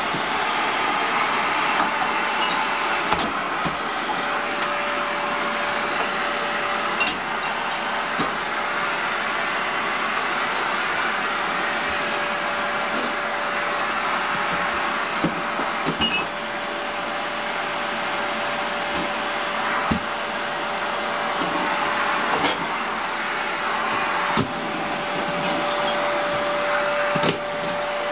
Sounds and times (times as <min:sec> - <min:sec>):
Vacuum cleaner: 0:00.0 - 0:28.1.